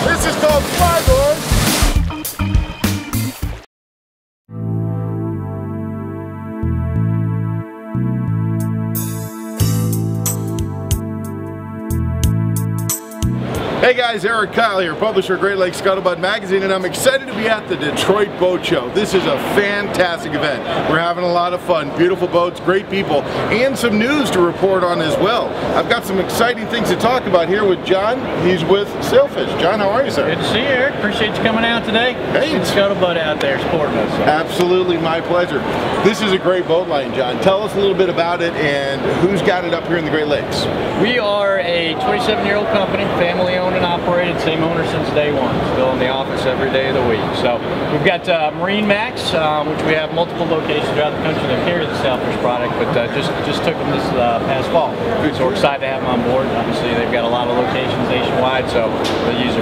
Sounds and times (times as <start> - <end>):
Speech: 0.0 - 1.4, 13.8 - 59.6
Music: 0.0 - 3.7, 4.5 - 13.8.